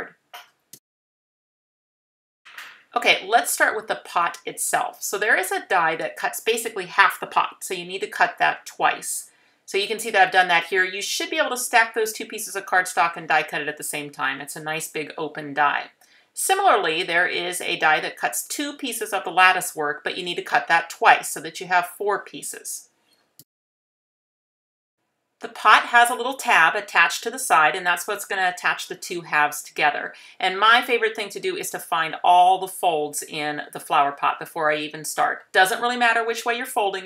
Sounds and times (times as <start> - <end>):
Speech: 3.0 - 22.8, 25.4 - 37.0.